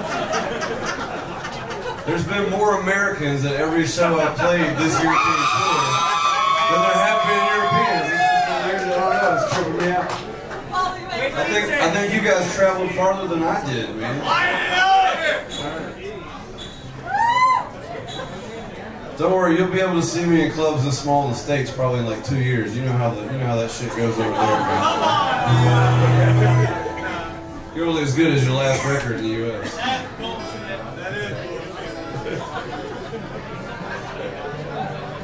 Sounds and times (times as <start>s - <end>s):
Speech: 2.0s - 6.0s, 6.7s - 16.5s, 17.9s - 26.8s, 27.8s - 32.6s.